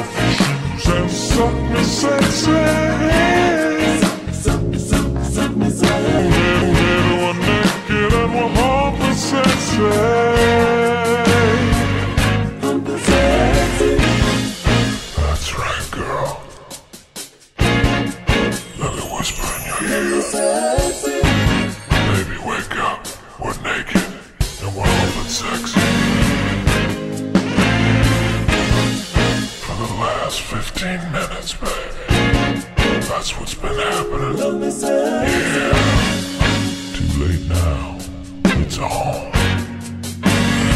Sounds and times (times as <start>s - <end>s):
Singing: 0.0s - 11.9s, 12.6s - 14.4s, 18.8s - 22.8s, 33.1s - 36.3s
Music: 0.0s - 40.7s.